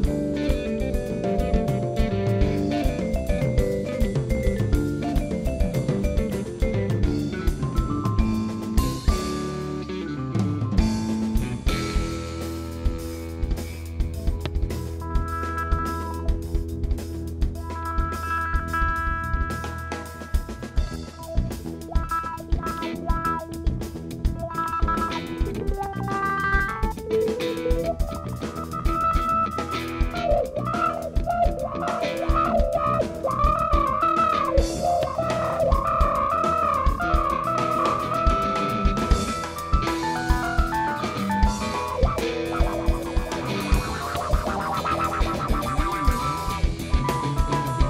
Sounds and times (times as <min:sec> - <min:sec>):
Drum: 0:00.0 - 0:47.9
Drum kit: 0:00.0 - 0:47.9
Guitar: 0:00.0 - 0:47.9.